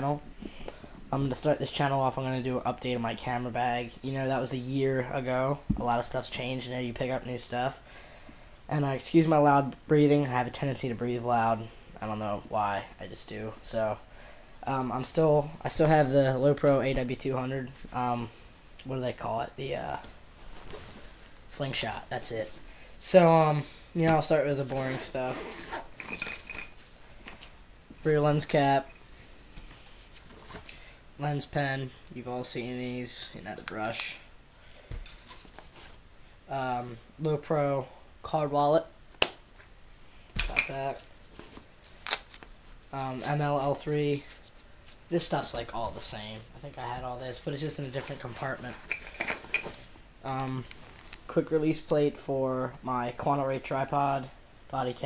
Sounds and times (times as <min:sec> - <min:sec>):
Speech: 0:00.0 - 0:00.3, 0:01.1 - 0:07.8, 0:08.7 - 0:14.0, 0:14.6 - 0:20.1, 0:21.5 - 0:25.6, 0:28.0 - 0:28.9, 0:31.2 - 0:34.3, 0:36.5 - 0:38.9, 0:40.5 - 0:41.1, 0:42.9 - 0:44.3, 0:45.1 - 0:48.8, 0:50.2 - 0:50.7, 0:51.3 - 0:55.0.